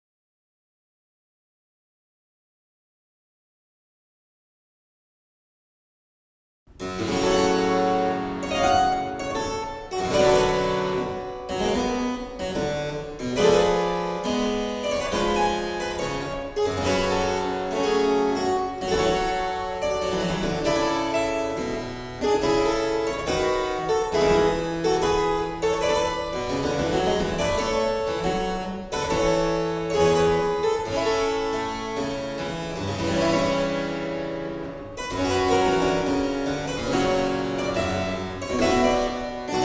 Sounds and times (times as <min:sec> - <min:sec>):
Harpsichord: 0:06.7 - 0:39.6.